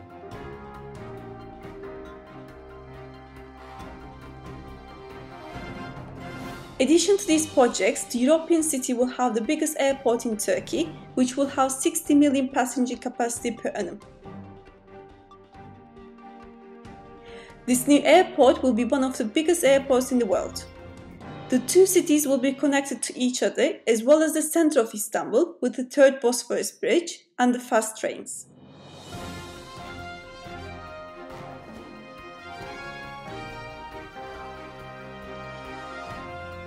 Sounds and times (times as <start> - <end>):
Music: 0.0 - 23.7, 28.4 - 36.6
Speech: 6.8 - 14.0, 17.7 - 20.7, 21.5 - 28.4.